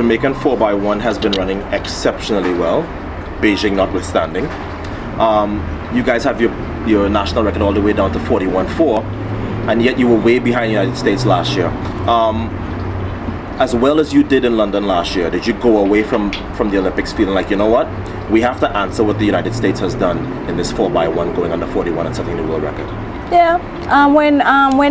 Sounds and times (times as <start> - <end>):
Speech: 0.0 - 4.5, 5.2 - 9.1, 9.7 - 12.5, 13.6 - 24.9.